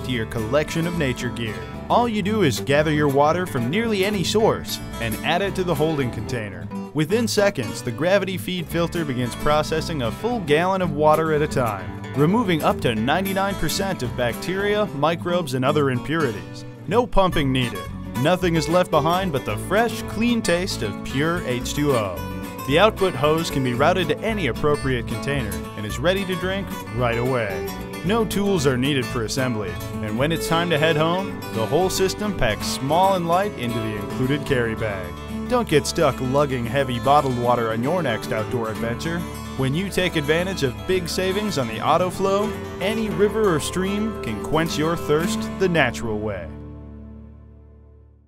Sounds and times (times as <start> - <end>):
Speech: 0.0 - 46.6
Music: 0.0 - 48.2.